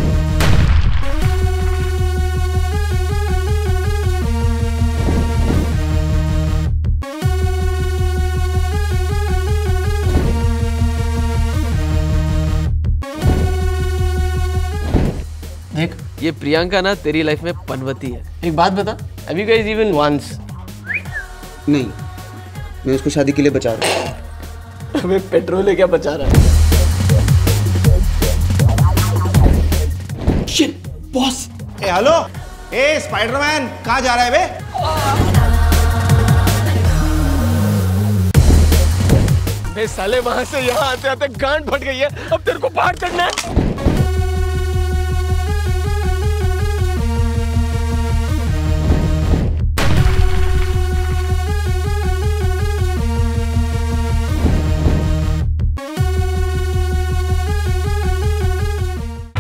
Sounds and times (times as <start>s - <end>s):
Music: 0.0s - 59.4s
Speech: 15.7s - 20.4s, 25.0s - 26.3s, 30.5s - 35.2s, 39.7s - 43.4s.